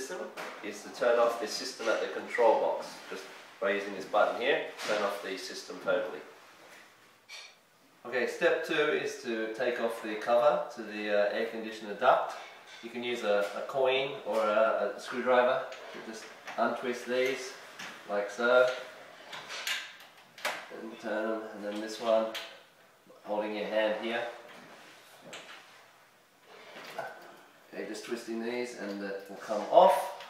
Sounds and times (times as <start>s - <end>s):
Speech: 0.0s - 6.3s, 8.0s - 18.9s, 20.7s - 22.5s, 23.1s - 24.4s, 27.7s - 30.3s.